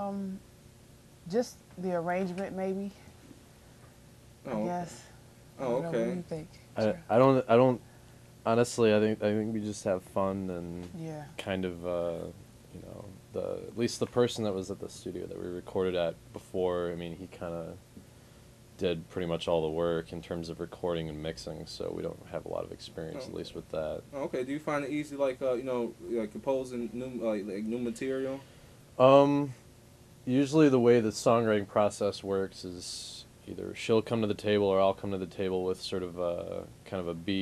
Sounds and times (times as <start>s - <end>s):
Speech: 4.5s - 7.8s, 8.5s - 17.8s, 18.8s - 28.4s, 29.0s - 29.6s, 30.3s - 37.4s.